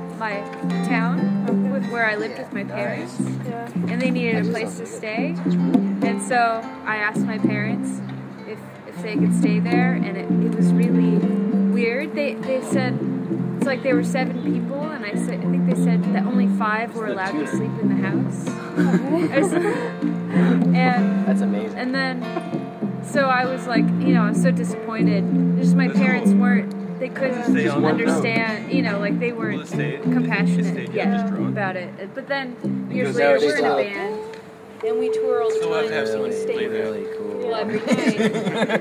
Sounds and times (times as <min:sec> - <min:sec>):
Music: 0:00.0 - 0:38.8
Speech: 0:01.8 - 0:05.4, 0:13.7 - 0:19.6, 0:23.1 - 0:34.2, 0:34.8 - 0:38.5.